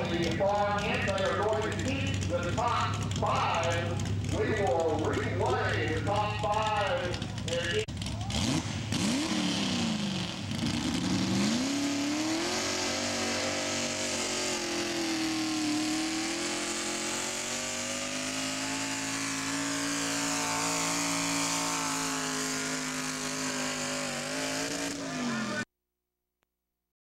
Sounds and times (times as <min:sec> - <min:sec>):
Truck: 0:00.0 - 0:25.7.